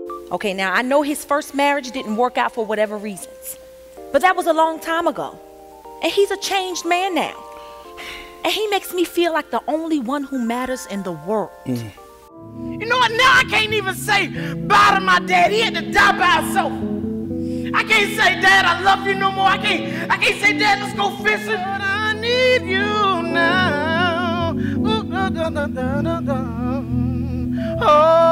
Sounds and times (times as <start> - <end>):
Music: 0.0 - 28.3
Speech: 0.3 - 3.2, 8.5 - 12.0.